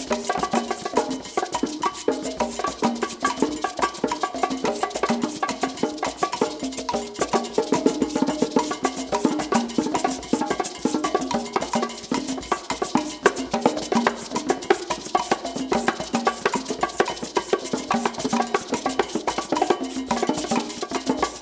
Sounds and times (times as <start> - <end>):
Wood block: 0.0 - 21.4.